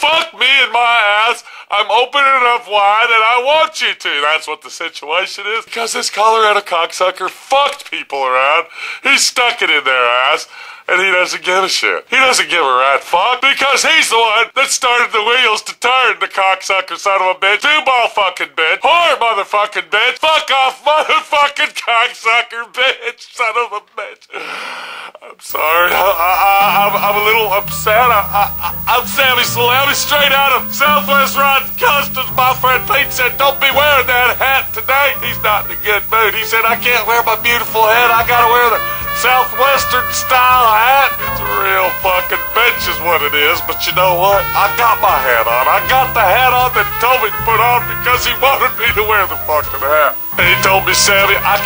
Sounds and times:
Speech: 0.0s - 24.4s, 25.2s - 51.6s
Music: 25.5s - 51.6s.

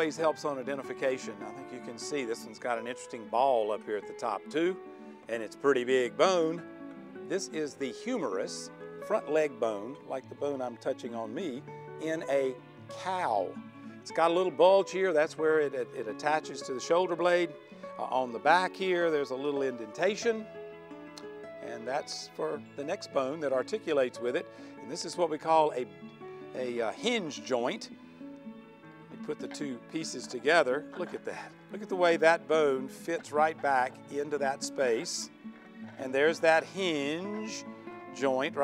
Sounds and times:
Speech: 0.0s - 6.6s, 7.3s - 13.5s, 14.1s - 20.4s, 21.6s - 25.9s, 26.6s - 27.9s, 29.2s - 35.3s, 36.0s - 37.6s, 38.2s - 38.6s
Music: 0.0s - 38.6s.

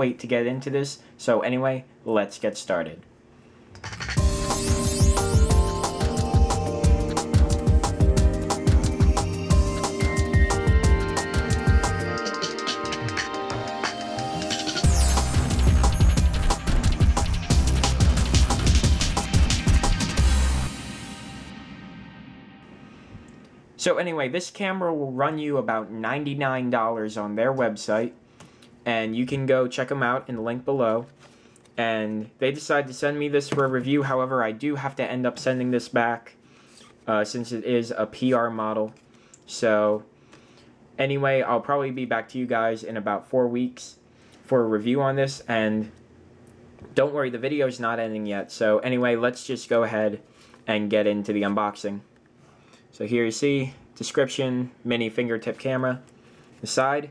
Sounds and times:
Music: 3.8s - 23.4s.

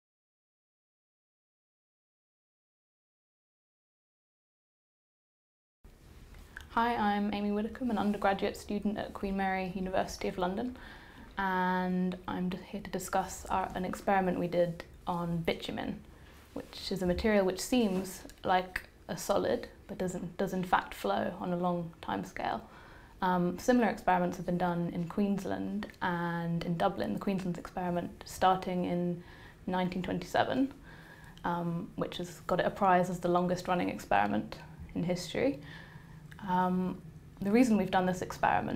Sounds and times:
Female speech, woman speaking: 6.7s - 10.8s, 11.4s - 16.0s, 16.6s - 30.8s, 31.4s - 35.6s, 36.4s - 38.7s.

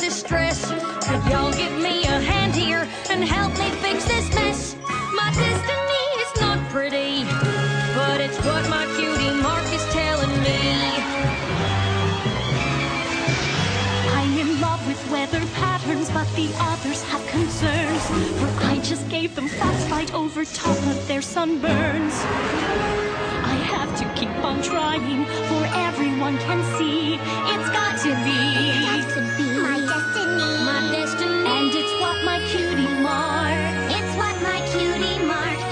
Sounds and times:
Jingle, tinkle: 27.8s - 35.5s.

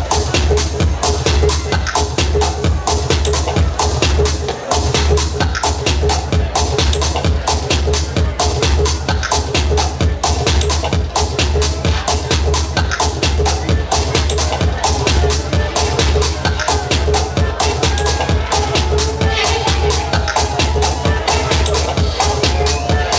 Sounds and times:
Speech: 0.0s - 23.1s
Techno: 0.0s - 23.1s.

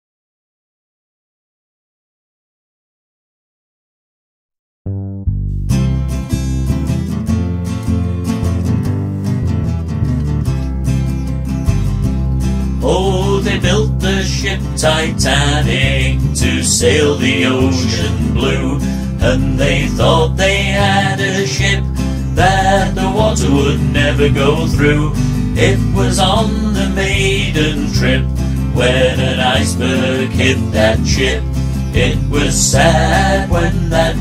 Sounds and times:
Music: 4.9s - 34.2s.

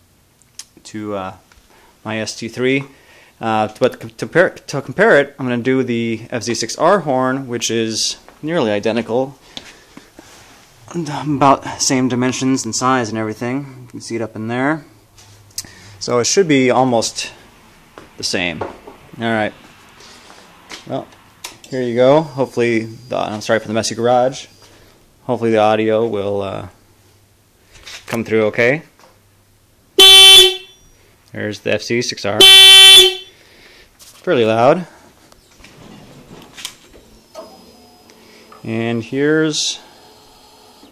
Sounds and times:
Speech: 0.8s - 1.4s, 2.0s - 9.4s, 10.9s - 14.9s, 16.0s - 17.4s, 18.2s - 18.6s, 19.2s - 19.6s, 20.9s - 21.1s, 21.7s - 24.5s, 25.2s - 26.8s, 28.1s - 28.9s, 31.3s - 32.4s, 34.2s - 35.0s, 38.6s - 39.9s
Vehicle horn, car horn, honking: 30.0s - 30.8s, 32.4s - 33.4s.

